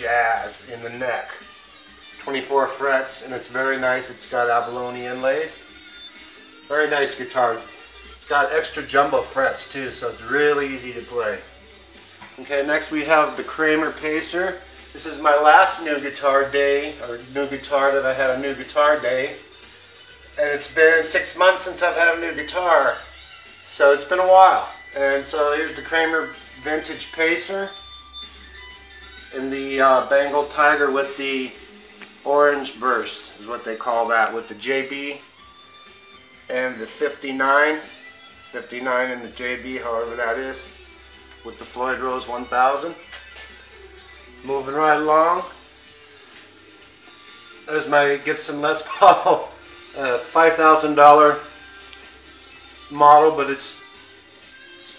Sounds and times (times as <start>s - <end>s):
Speech: 0.0s - 1.4s, 2.2s - 5.7s, 6.7s - 11.5s, 12.4s - 19.4s, 20.4s - 23.1s, 23.7s - 27.8s, 29.3s - 31.6s, 32.2s - 35.2s, 36.5s - 37.9s, 38.5s - 40.8s, 41.4s - 43.0s, 44.4s - 45.6s, 47.6s - 51.5s, 52.9s - 53.8s.